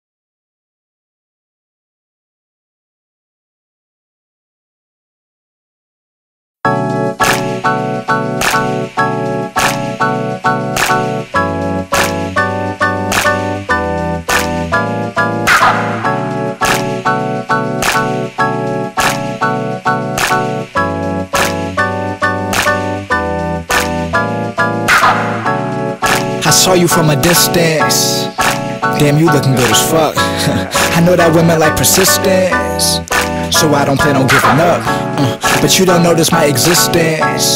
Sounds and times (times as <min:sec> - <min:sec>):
Soundtrack music: 0:06.7 - 0:37.5.